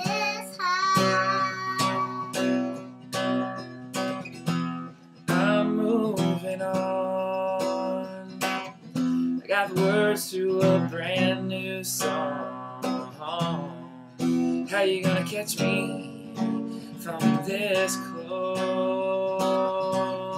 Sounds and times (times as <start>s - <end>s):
Music: 0.0s - 20.3s
Male singing: 5.3s - 8.5s, 9.4s - 20.3s.